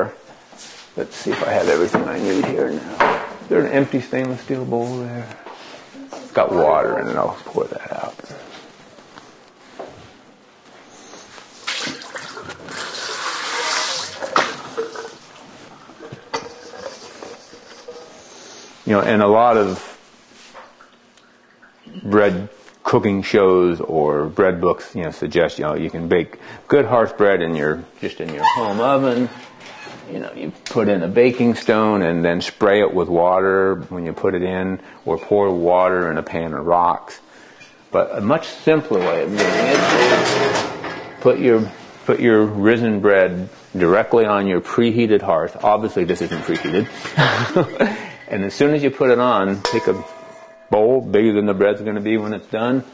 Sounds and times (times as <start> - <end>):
Inside, small room: 0.0 - 52.9
Speech: 1.0 - 5.4, 6.0 - 8.4, 18.9 - 19.9, 21.9 - 29.4, 30.1 - 37.2, 37.9 - 40.4, 41.2 - 46.9, 48.3 - 50.0, 50.7 - 52.9.